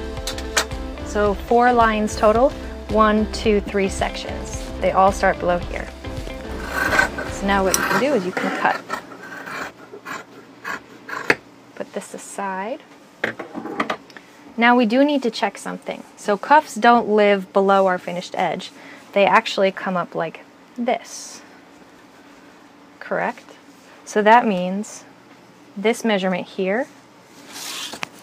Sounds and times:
Speech: 1.1s - 5.9s, 7.4s - 8.8s, 11.8s - 12.9s, 14.6s - 21.5s, 23.0s - 25.1s, 25.8s - 27.0s.

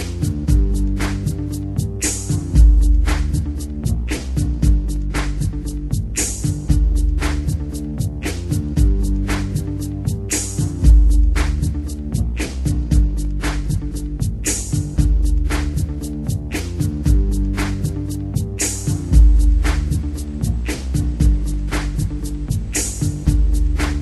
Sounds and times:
Music: 0.0s - 24.0s.

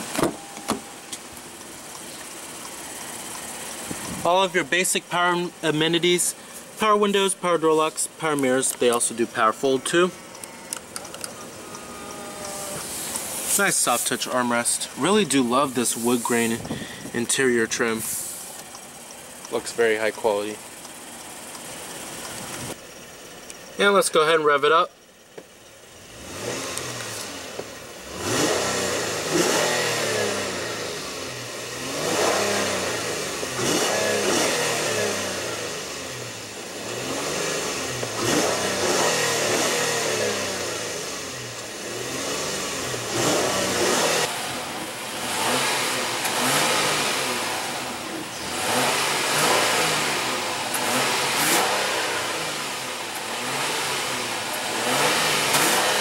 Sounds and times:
Speech: 4.2s - 10.2s, 13.5s - 18.2s, 19.5s - 20.6s, 23.8s - 24.9s.

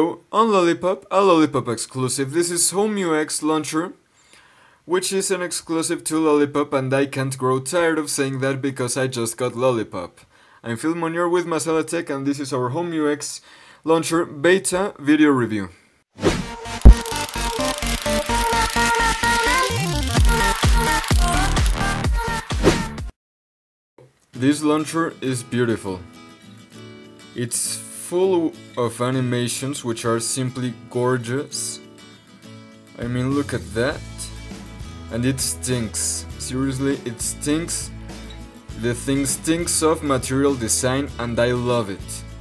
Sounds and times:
Speech: 0.0s - 4.0s, 4.9s - 15.8s, 24.4s - 26.1s, 27.4s - 31.9s, 33.0s - 34.4s, 35.1s - 37.9s, 38.8s - 42.3s
Electronic dance music: 16.8s - 23.1s.

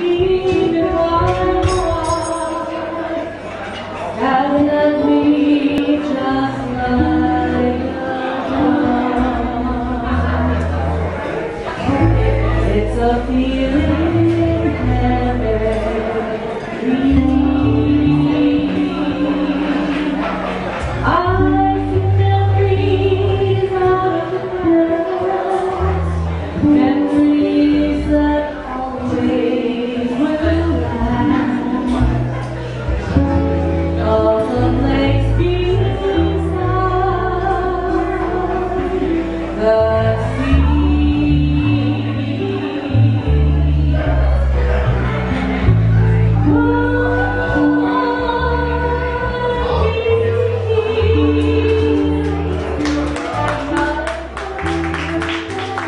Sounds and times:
Female singing: 0.0s - 3.4s, 4.1s - 10.8s, 11.8s - 32.4s, 34.0s - 44.7s, 46.4s - 55.8s
Music: 0.0s - 55.8s.

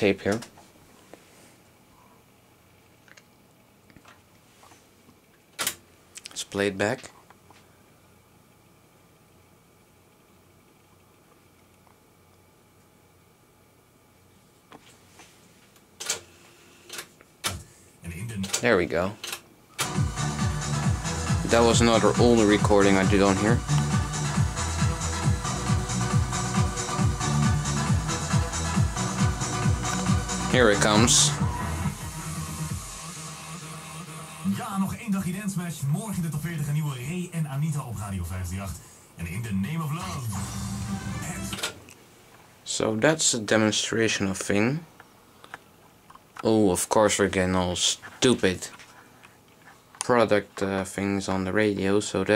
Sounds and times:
Speech: 0.0s - 0.6s, 6.3s - 7.2s, 18.0s - 19.2s, 21.4s - 23.6s, 30.5s - 31.4s, 34.5s - 40.3s, 42.7s - 44.9s, 46.4s - 48.8s, 50.0s - 52.3s
Music: 19.8s - 41.8s
Radio: 33.2s - 41.8s.

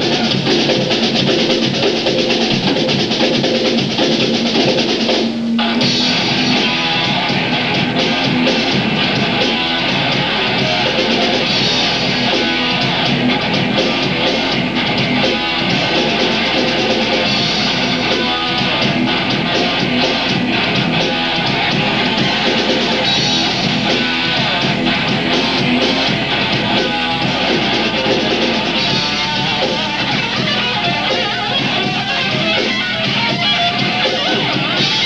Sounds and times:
Music: 0.0s - 35.0s.

